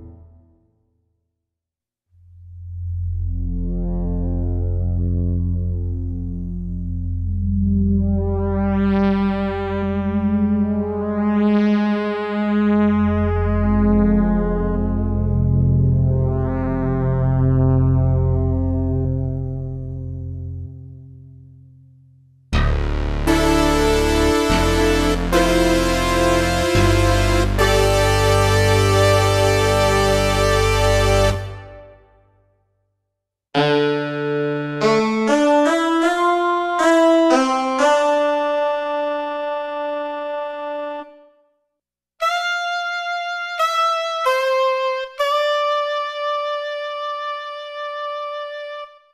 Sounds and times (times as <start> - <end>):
Synthesizer: 2.3 - 21.8, 22.5 - 32.5, 33.6 - 41.5, 42.2 - 49.1.